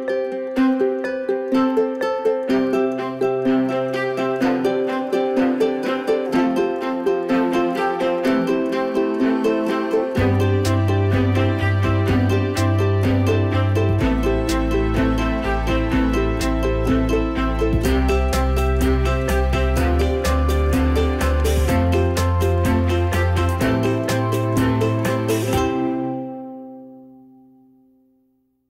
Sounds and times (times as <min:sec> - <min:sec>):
Music: 0:00.0 - 0:28.6.